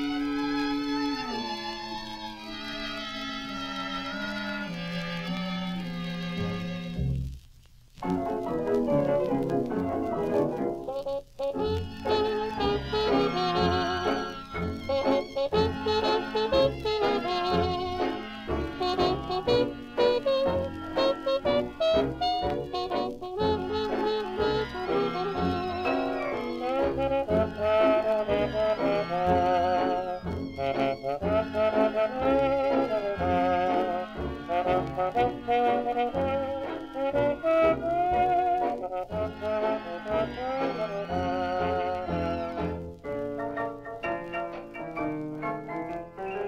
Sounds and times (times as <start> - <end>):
Orchestra: 0.0 - 7.4, 8.0 - 46.4.